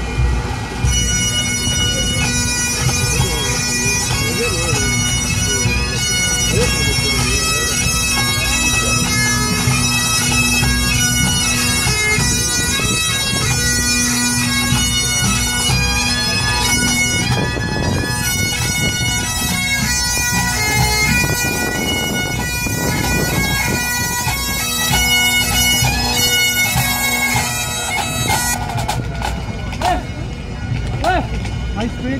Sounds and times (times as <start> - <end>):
Bagpipes: 0.0 - 32.1.